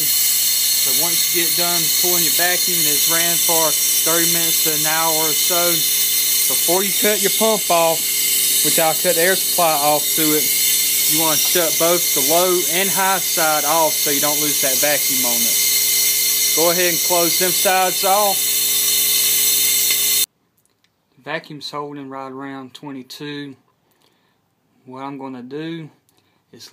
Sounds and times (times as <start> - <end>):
Speech: 0.9 - 5.9, 6.5 - 8.0, 8.6 - 10.5, 11.1 - 15.5, 16.6 - 18.4, 21.2 - 23.6, 24.9 - 26.0.